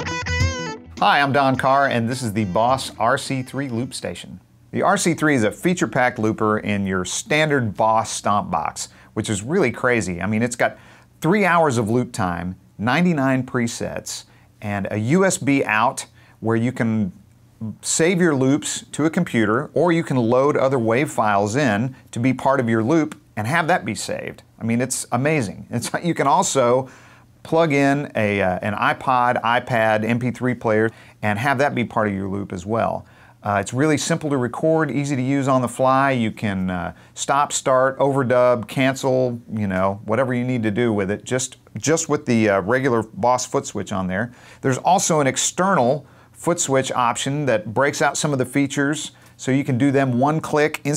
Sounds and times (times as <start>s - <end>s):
Speech: 1.0s - 50.9s.